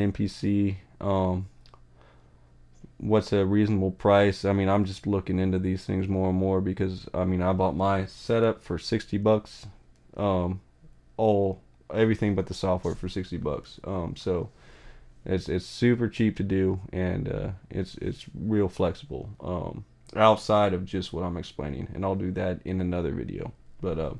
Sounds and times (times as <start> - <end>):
Speech: 0.0 - 1.5, 2.9 - 14.5, 15.2 - 24.1.